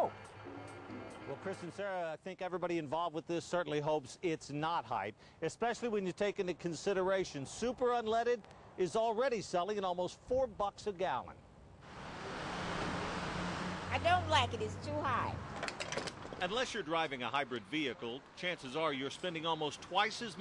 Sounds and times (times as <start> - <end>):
Engine: 0.0 - 1.6, 11.8 - 16.8
Vehicle: 0.0 - 1.8, 11.4 - 20.4
Speech: 1.3 - 11.4, 16.4 - 20.4.